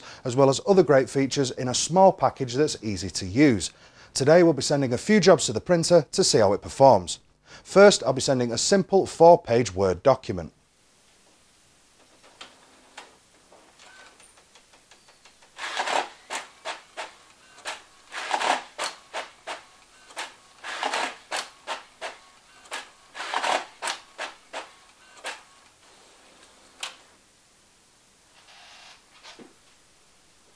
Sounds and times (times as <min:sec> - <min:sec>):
Printer: 0:13.8 - 0:27.1.